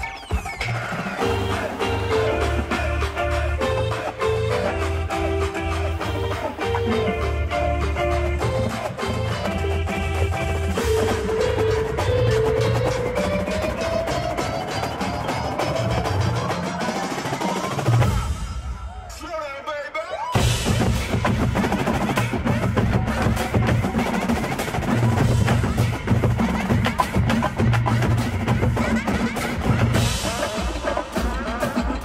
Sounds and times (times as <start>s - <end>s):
Percussion: 0.0s - 32.0s.